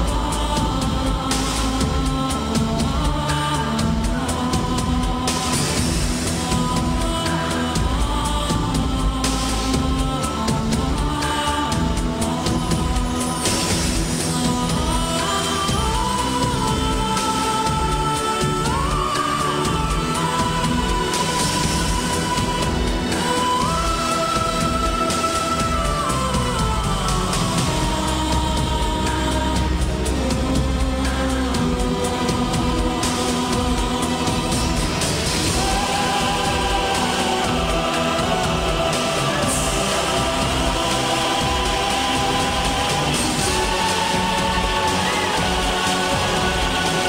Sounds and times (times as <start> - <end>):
Music: 0.0 - 47.0.